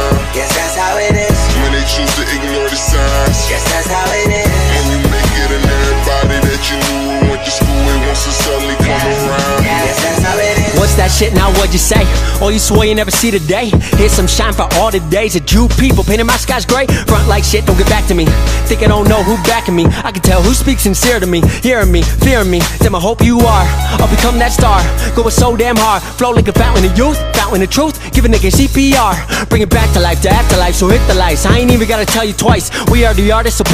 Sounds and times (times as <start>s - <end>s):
Music: 0.0s - 33.7s.